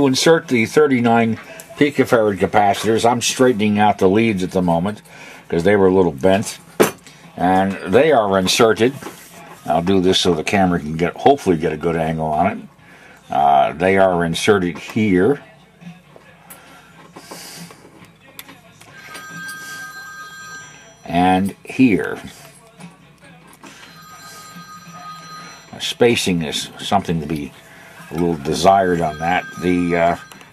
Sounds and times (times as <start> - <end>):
Speech: 0.0 - 6.6, 7.4 - 12.7, 13.3 - 15.5, 21.0 - 22.6, 25.7 - 30.3
Music: 0.0 - 30.5
Alarm clock: 18.9 - 22.2, 23.7 - 27.5, 28.2 - 30.5.